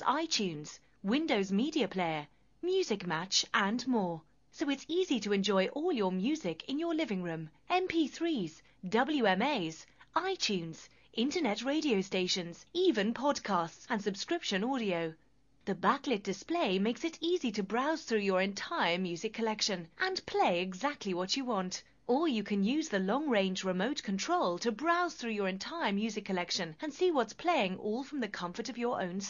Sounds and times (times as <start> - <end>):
Speech: 0.0 - 29.2.